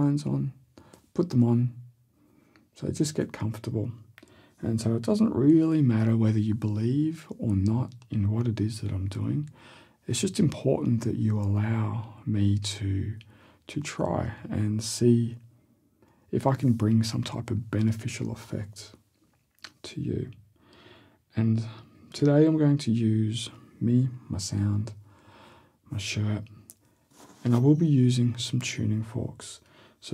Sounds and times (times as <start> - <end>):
Speech: 0.0 - 1.9, 2.8 - 15.5, 16.3 - 19.0, 19.6 - 20.4, 21.3 - 25.0, 25.9 - 26.8, 27.4 - 30.1.